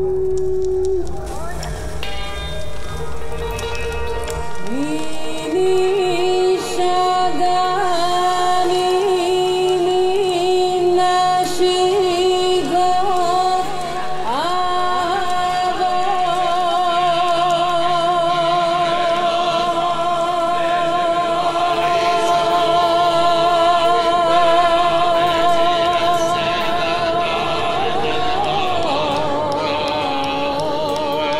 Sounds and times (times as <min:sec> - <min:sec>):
Music: 0:00.0 - 0:31.3.